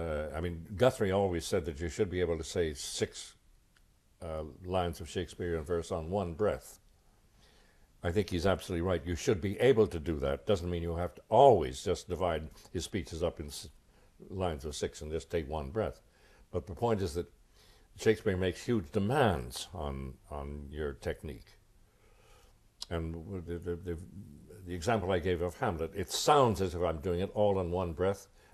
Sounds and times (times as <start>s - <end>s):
Speech: 0.0s - 3.4s, 4.2s - 6.8s, 8.0s - 17.4s, 18.0s - 21.6s, 22.8s - 28.3s.